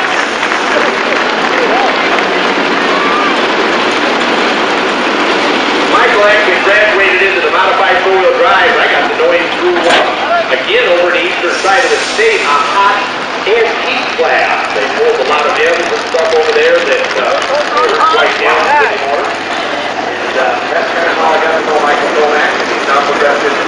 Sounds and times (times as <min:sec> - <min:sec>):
Vehicle: 0:00.0 - 0:23.6
Speech: 0:05.9 - 0:19.4, 0:20.2 - 0:23.6.